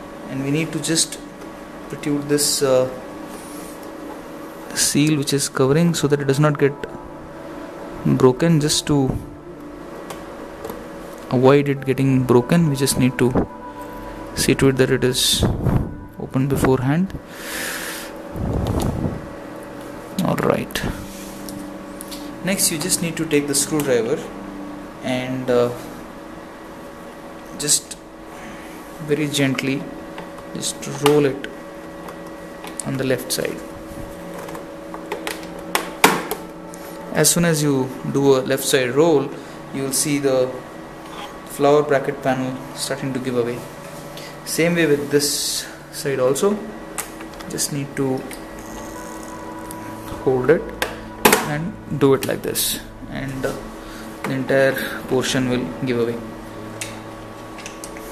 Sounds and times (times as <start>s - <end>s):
Microwave oven: 0.0s - 58.1s.